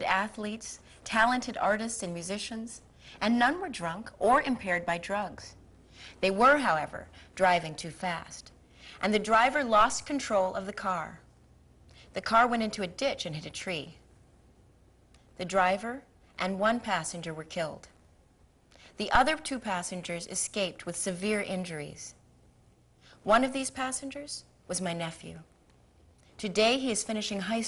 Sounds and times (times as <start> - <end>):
Female speech, woman speaking: 0.0 - 5.6, 6.2 - 11.3, 12.2 - 14.0, 15.4 - 18.0, 19.0 - 22.2, 23.2 - 25.5, 26.4 - 27.6
Narration, monologue: 0.0 - 27.6.